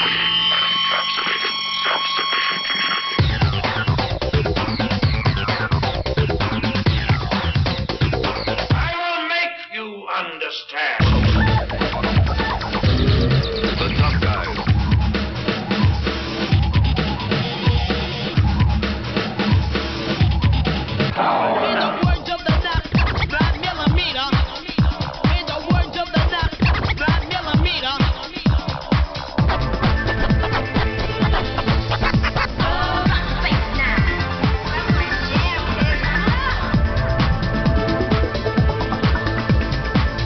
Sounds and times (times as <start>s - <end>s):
Music: 0.0s - 9.2s, 11.0s - 40.2s.